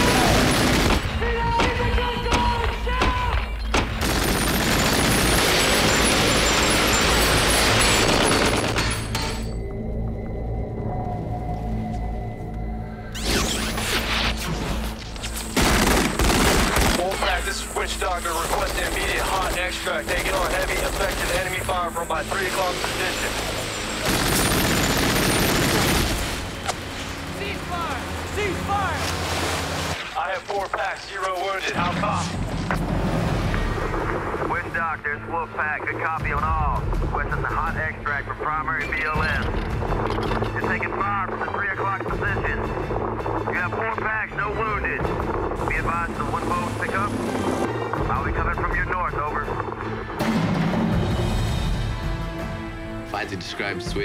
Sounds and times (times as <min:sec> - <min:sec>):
Fusillade: 0:00.0 - 0:01.2, 0:03.8 - 0:09.0, 0:15.5 - 0:17.3, 0:24.0 - 0:26.5.